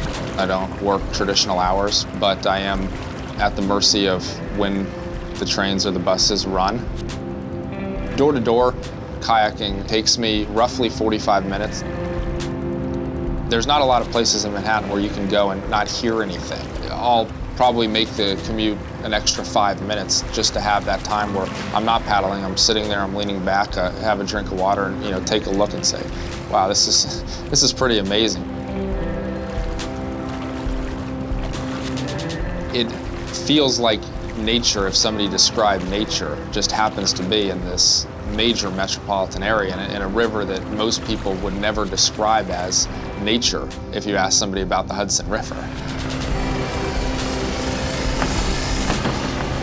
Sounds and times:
Boat, Water vehicle: 0.0s - 49.6s
Speech: 0.4s - 6.9s, 8.1s - 11.8s, 13.5s - 28.4s, 32.8s - 45.7s.

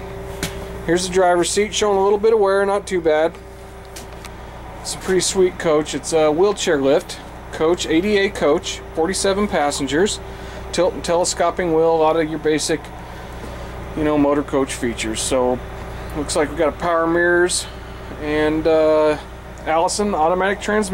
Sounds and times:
Speech: 0.9s - 3.4s, 4.8s - 12.9s, 14.0s - 15.6s, 16.2s - 20.9s.

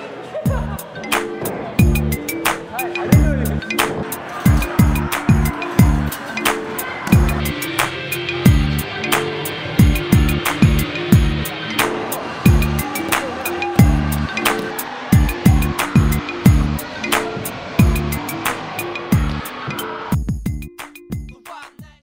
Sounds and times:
Music: 0.0s - 22.0s.

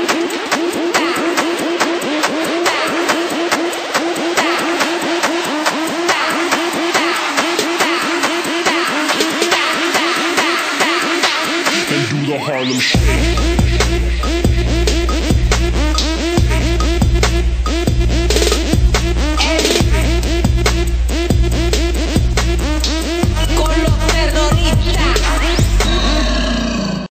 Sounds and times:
Music: 0.0s - 26.6s.

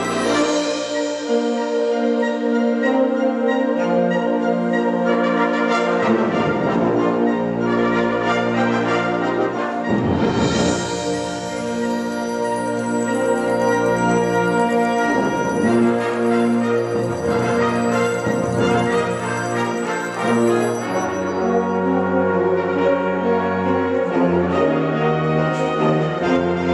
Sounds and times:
Orchestra: 0.0s - 26.7s.

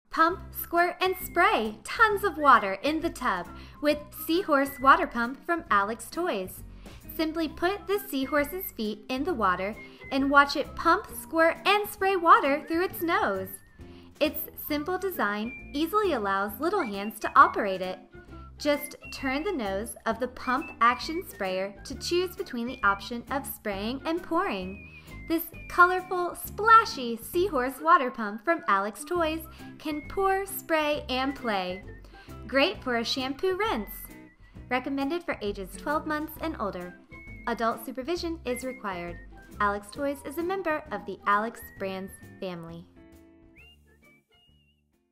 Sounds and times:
Speech: 0.1s - 13.6s, 14.2s - 18.0s, 18.6s - 31.8s, 32.5s - 34.1s, 34.7s - 42.9s
Music: 0.1s - 45.1s.

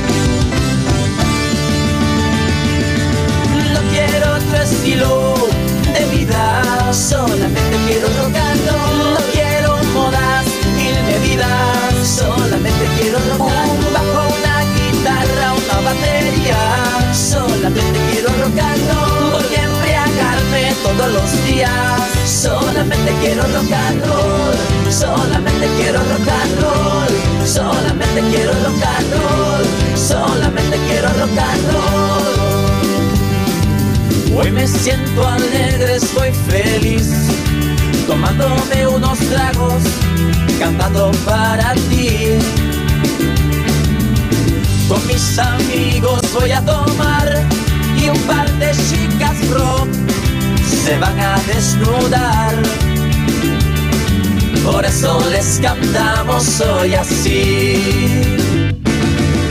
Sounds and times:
Rock and roll: 0.0s - 59.5s.

